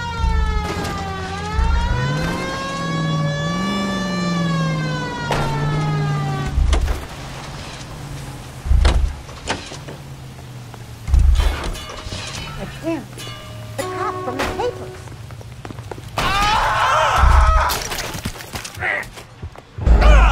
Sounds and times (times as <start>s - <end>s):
Vehicle: 0.0s - 20.3s.